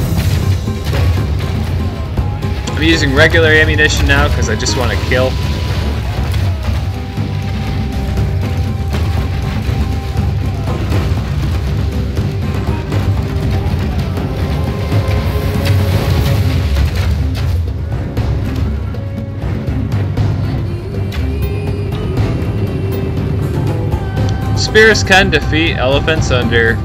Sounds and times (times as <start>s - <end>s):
Music: 0.0s - 26.8s.